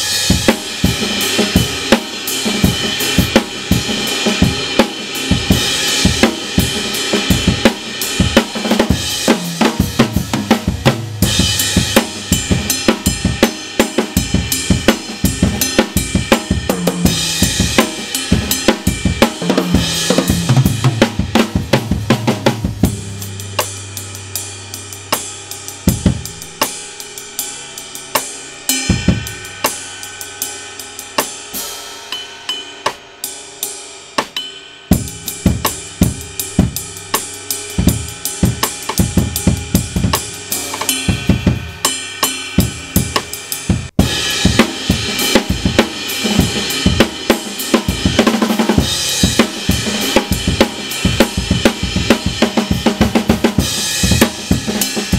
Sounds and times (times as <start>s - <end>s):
Bass drum: 0.0s - 27.2s, 35.0s - 41.8s, 42.6s - 55.1s
Drum kit: 0.0s - 55.1s
Hi-hat: 35.0s - 55.1s.